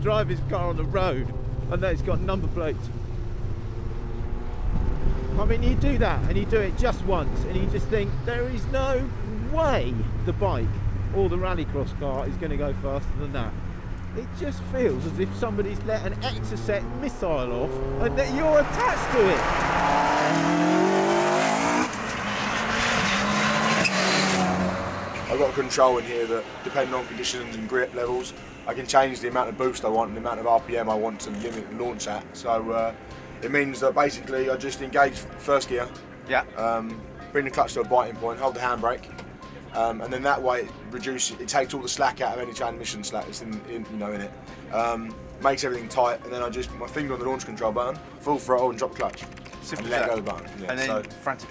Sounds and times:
Speech: 0.0 - 2.9, 5.3 - 13.6, 14.2 - 19.4, 25.3 - 39.1, 39.7 - 51.5
Outside, urban or manmade: 0.0 - 51.5
Race car, auto racing: 0.0 - 51.5.

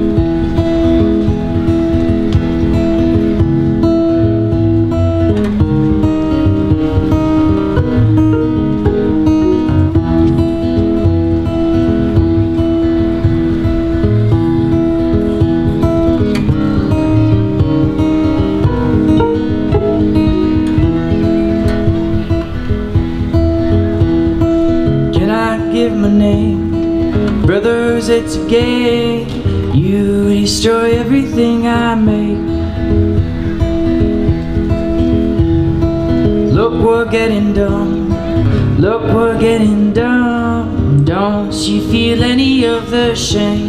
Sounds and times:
Music: 0.0 - 43.6.

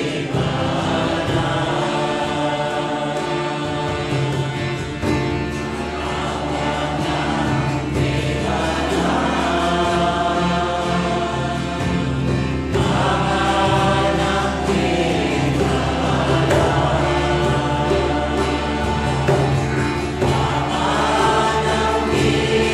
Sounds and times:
Mantra: 0.0 - 22.7.

